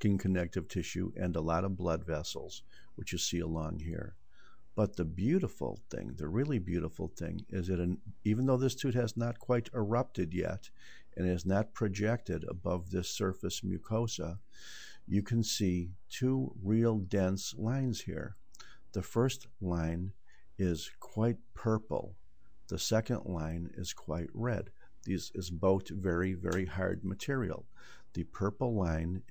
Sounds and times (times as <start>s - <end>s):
Speech: 0.0s - 4.2s, 4.8s - 29.3s.